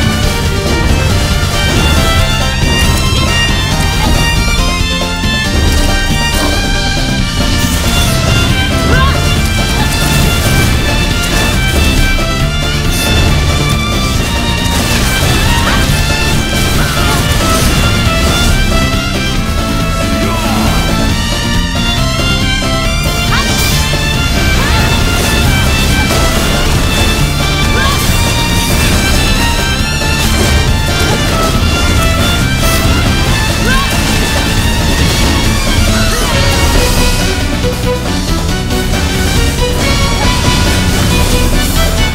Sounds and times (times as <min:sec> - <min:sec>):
Music: 0:00.0 - 0:42.1.